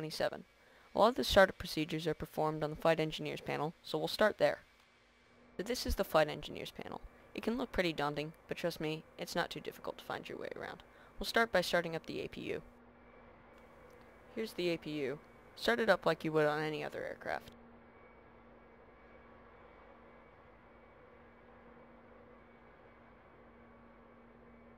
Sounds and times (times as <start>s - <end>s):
Speech: 0.0s - 0.4s, 1.0s - 4.6s, 5.6s - 12.7s, 14.4s - 17.5s.